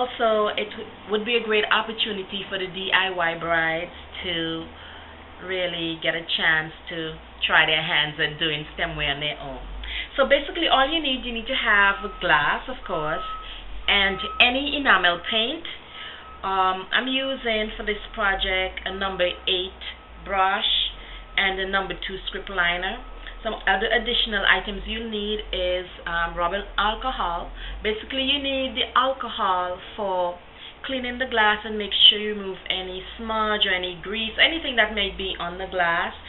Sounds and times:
Speech: 0:00.0 - 0:04.8, 0:05.4 - 0:13.3, 0:13.9 - 0:15.7, 0:16.4 - 0:36.2.

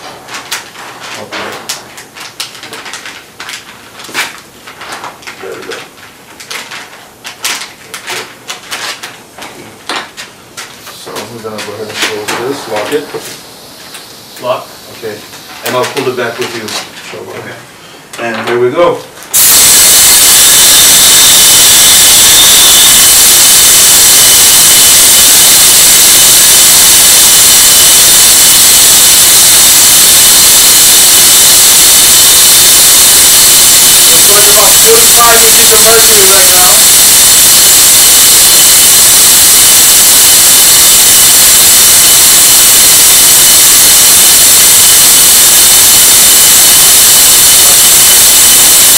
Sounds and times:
Speech: 0:01.2 - 0:01.7, 0:05.4 - 0:05.9, 0:10.9 - 0:13.3, 0:14.4 - 0:19.1, 0:34.3 - 0:36.8.

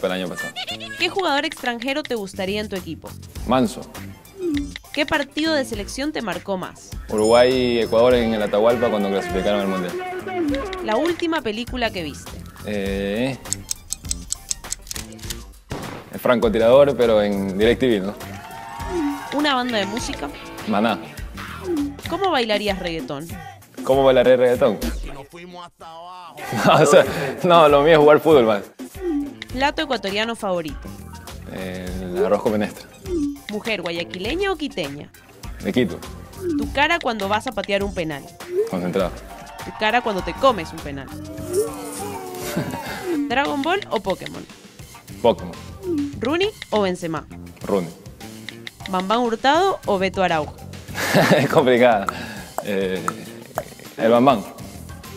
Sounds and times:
Music: 0:00.0 - 0:55.1.

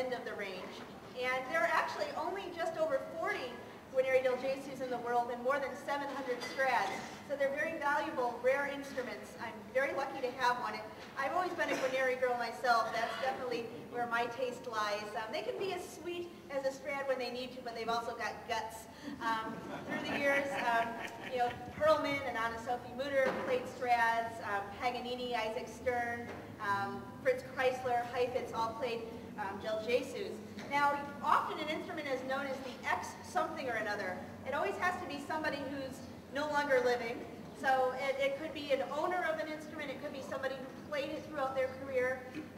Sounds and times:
Speech: 0:00.0 - 0:42.4.

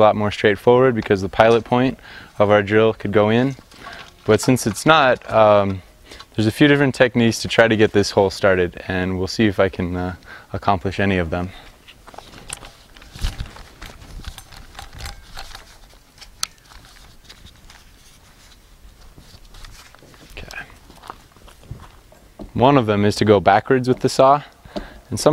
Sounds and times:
Speech: 0:00.0 - 0:03.6, 0:04.3 - 0:05.8, 0:06.4 - 0:11.6, 0:22.6 - 0:24.5, 0:25.1 - 0:25.3.

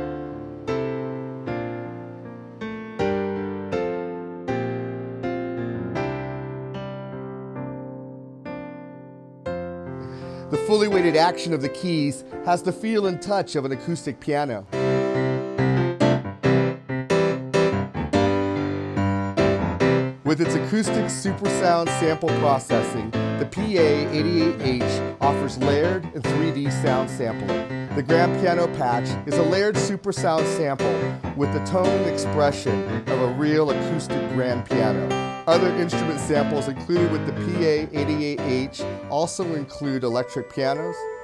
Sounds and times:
Music: 0:00.0 - 0:41.2.

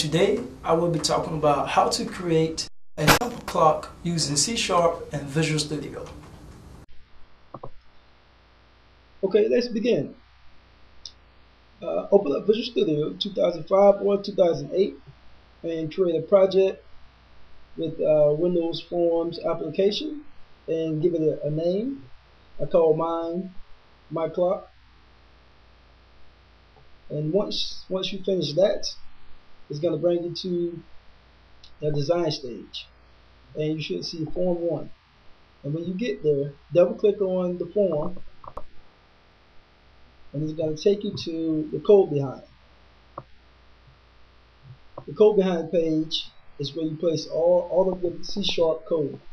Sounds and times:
Speech: 0:00.0 - 0:06.2, 0:09.2 - 0:10.2, 0:11.8 - 0:15.0, 0:15.6 - 0:16.8, 0:17.8 - 0:24.7, 0:27.1 - 0:29.0, 0:29.7 - 0:30.9, 0:31.7 - 0:32.9, 0:33.5 - 0:34.9, 0:35.7 - 0:38.2, 0:40.4 - 0:42.5, 0:45.0 - 0:49.2.

